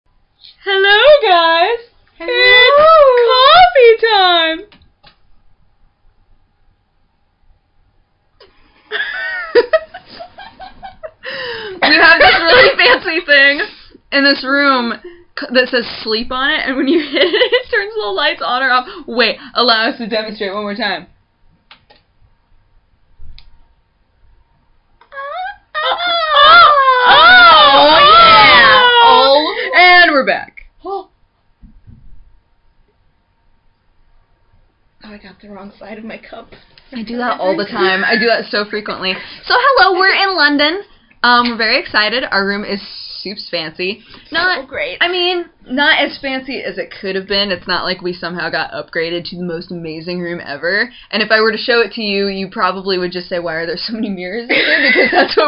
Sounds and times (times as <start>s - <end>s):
Inside, small room: 0.1s - 55.4s.